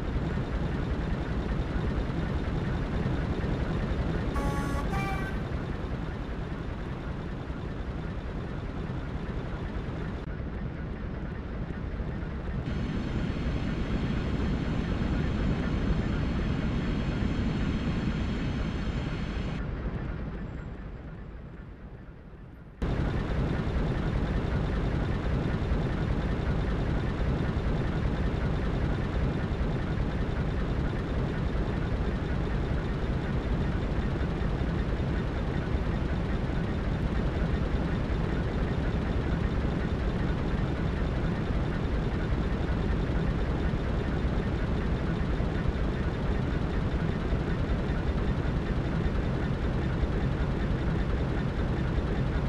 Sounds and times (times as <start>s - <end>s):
Railroad car, train wagon: 0.0s - 52.4s
Train: 0.0s - 52.4s.